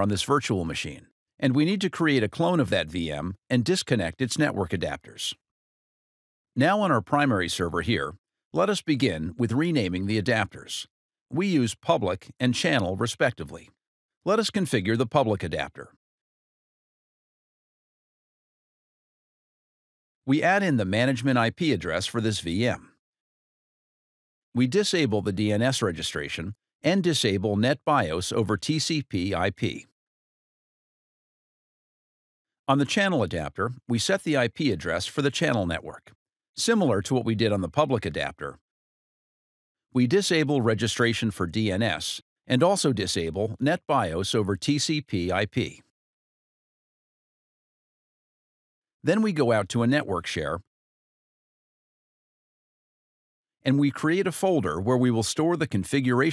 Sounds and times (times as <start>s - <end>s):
Speech: 0.0s - 5.4s, 6.6s - 16.0s, 20.3s - 23.0s, 24.6s - 29.9s, 32.7s - 38.6s, 40.0s - 45.9s, 49.0s - 50.7s, 53.6s - 56.3s.